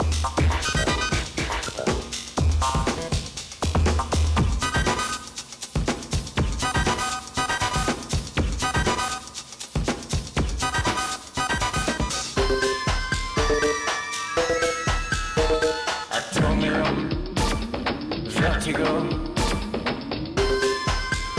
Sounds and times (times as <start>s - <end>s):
Music: 0.0s - 21.3s
Singing: 16.1s - 17.5s.